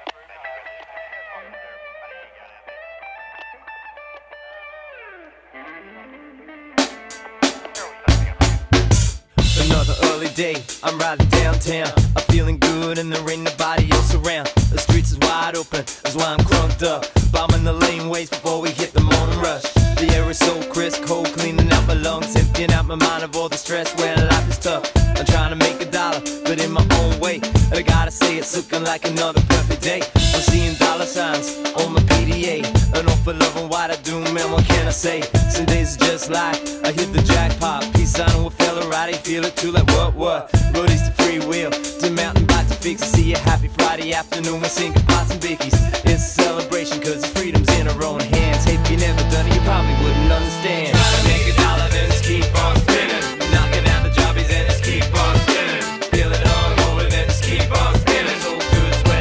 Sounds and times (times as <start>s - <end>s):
Music: 0.0s - 59.2s.